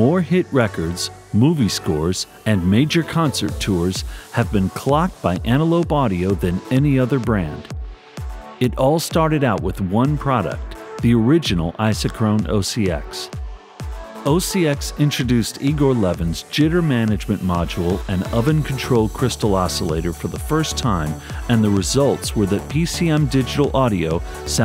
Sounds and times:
Speech: 0.0s - 7.7s, 8.6s - 13.3s, 14.2s - 24.6s
Music: 0.0s - 24.6s.

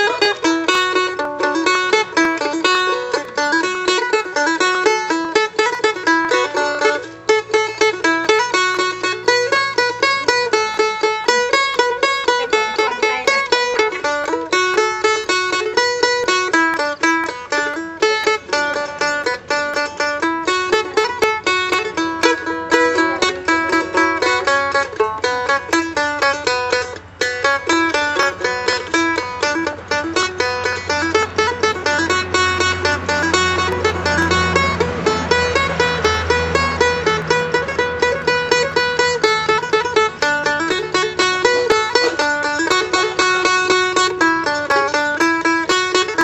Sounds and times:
Bluegrass: 0.0s - 46.2s.

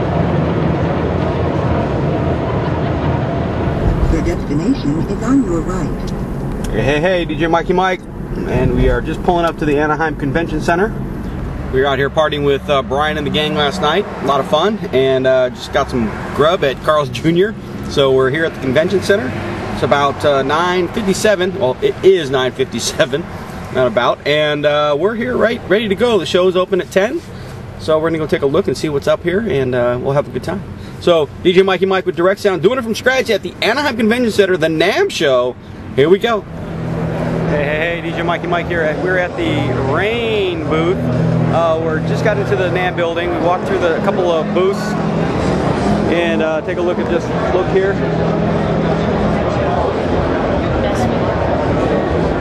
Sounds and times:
Speech: 11.7s - 27.2s, 27.8s - 36.5s, 37.5s - 45.0s, 46.1s - 48.0s.

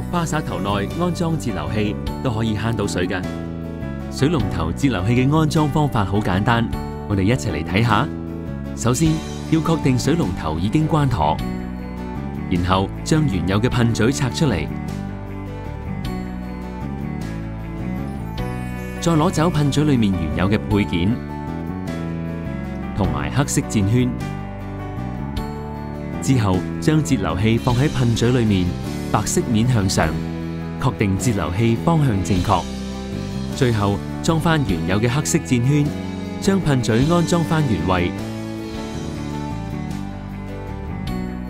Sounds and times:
Speech: 0.0s - 3.3s, 4.2s - 8.1s, 8.8s - 11.4s, 12.5s - 14.7s, 19.0s - 21.2s, 23.0s - 24.2s, 26.2s - 30.2s, 30.8s - 32.7s, 33.6s - 38.2s
Music: 0.0s - 41.4s.

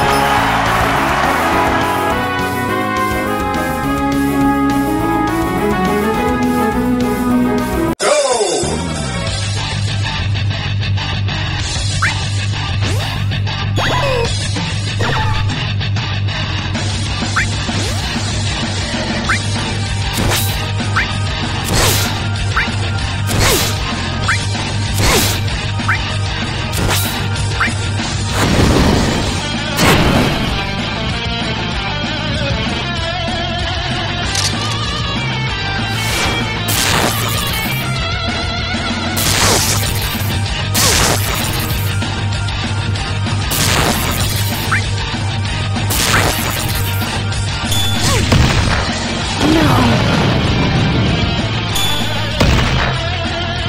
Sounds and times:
Music: 0.0s - 53.6s
Smash, crash: 20.2s - 20.7s, 21.7s - 22.2s, 23.3s - 24.4s, 25.0s - 25.5s, 26.8s - 30.8s, 36.0s - 37.9s, 39.2s - 42.0s, 43.5s - 44.9s, 45.9s - 47.2s, 47.8s - 51.1s, 51.8s - 53.0s.

